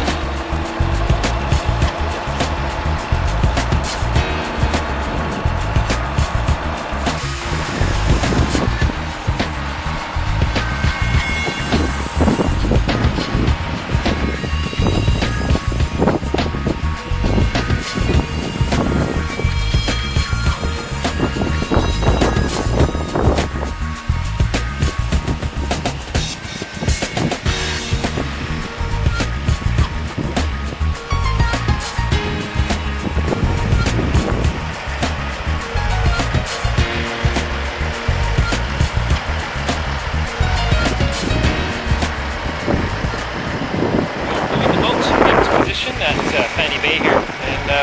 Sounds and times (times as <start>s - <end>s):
Music: 0.0s - 47.8s
Vehicle: 0.0s - 47.8s.